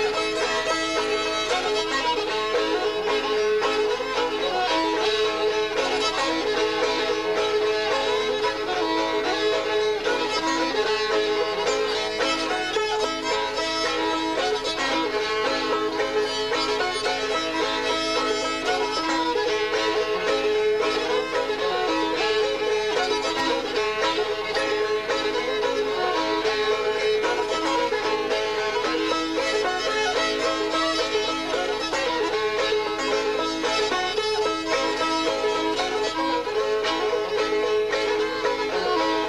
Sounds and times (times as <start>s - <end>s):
Musical instrument: 0.0s - 39.2s
Traditional music: 0.0s - 39.2s.